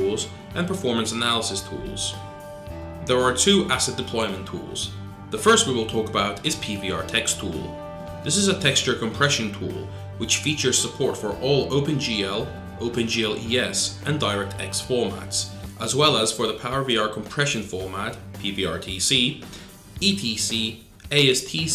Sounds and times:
Speech: 0:00.0 - 0:02.2, 0:03.1 - 0:21.7
Music: 0:00.0 - 0:21.7.

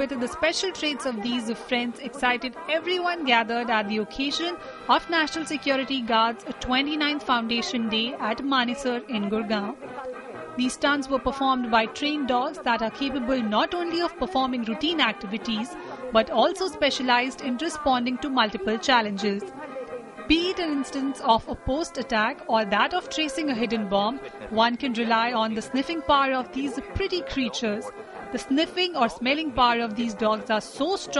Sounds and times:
Speech: 0:00.0 - 0:19.6, 0:20.3 - 0:31.1
Music: 0:00.0 - 0:31.1.

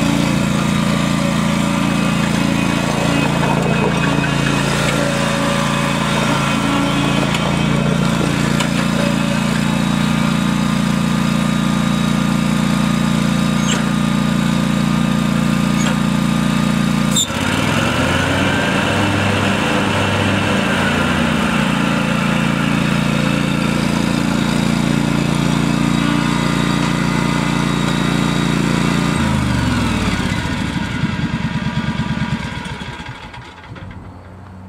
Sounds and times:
Vehicle: 0:00.0 - 0:34.6.

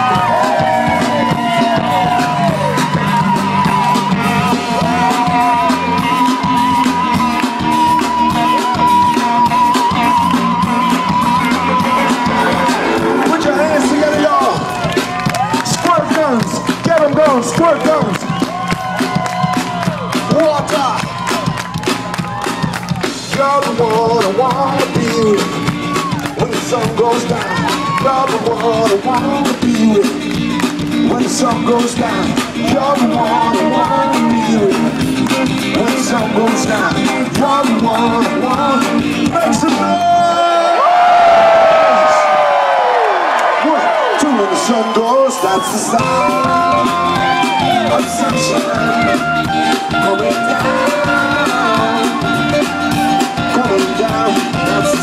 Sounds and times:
Exciting music: 0:00.0 - 0:40.4, 0:45.7 - 0:55.0.

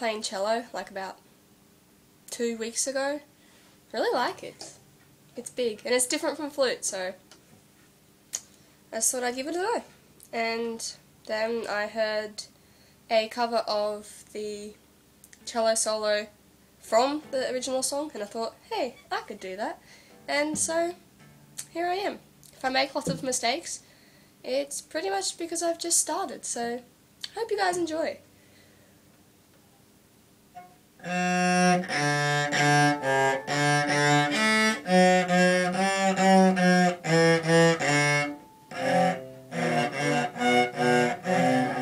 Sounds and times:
Speech: 0:00.0 - 0:01.2, 0:02.3 - 0:03.3, 0:03.9 - 0:04.8, 0:05.4 - 0:07.2, 0:09.0 - 0:14.8, 0:15.4 - 0:21.0, 0:21.6 - 0:28.2.

